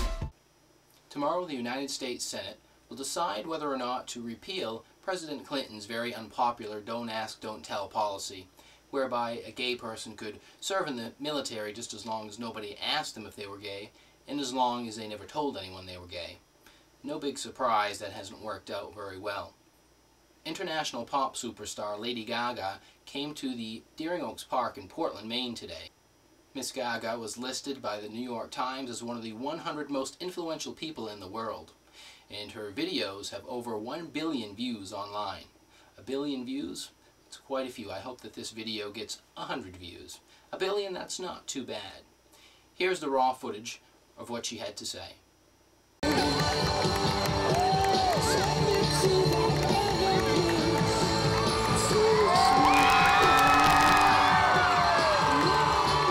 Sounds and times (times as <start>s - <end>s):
Narration, monologue: 0.7s - 46.0s
Male speech, man speaking: 1.1s - 16.4s, 17.0s - 19.6s, 20.5s - 25.9s, 26.6s - 42.1s, 42.8s - 45.2s.